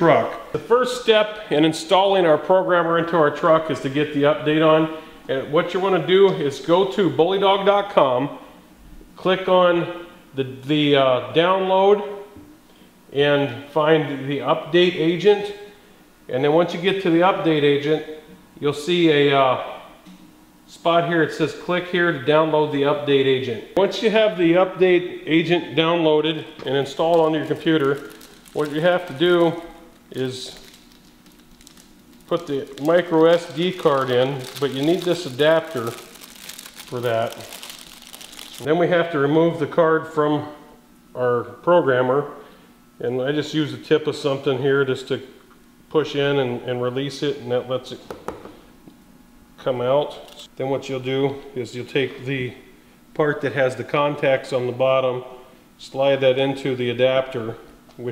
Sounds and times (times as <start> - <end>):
Speech: 0.0 - 8.5, 9.2 - 12.2, 13.1 - 15.7, 16.3 - 19.9, 20.7 - 30.7, 32.3 - 36.1, 36.8 - 37.6, 38.6 - 40.6, 41.2 - 42.4, 43.0 - 45.3, 45.9 - 48.2, 49.6 - 58.1.